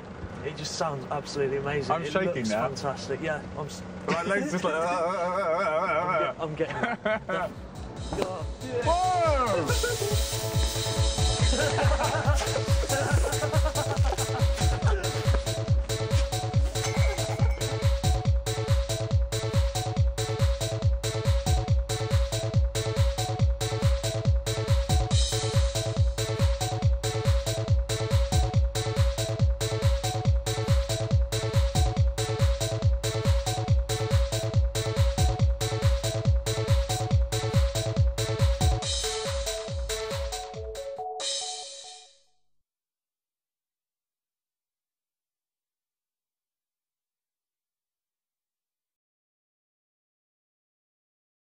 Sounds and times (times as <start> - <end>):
Trance music: 7.2 - 42.2.